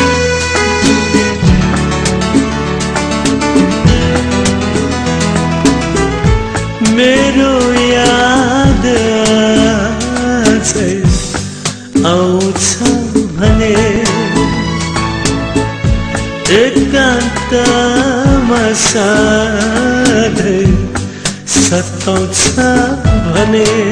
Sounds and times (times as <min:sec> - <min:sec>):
Music: 0:00.0 - 0:23.9.